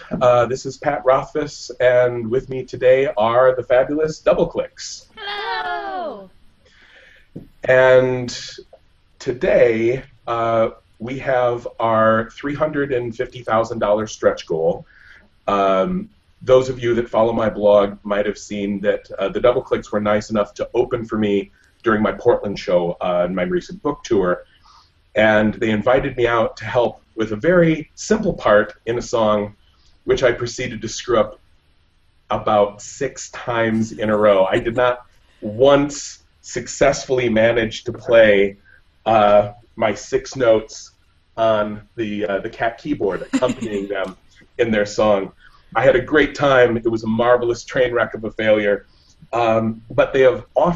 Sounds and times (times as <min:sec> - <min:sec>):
Speech: 0:00.0 - 0:06.3, 0:07.6 - 0:24.4, 0:25.2 - 0:29.5, 0:30.1 - 0:31.4, 0:32.3 - 0:50.7.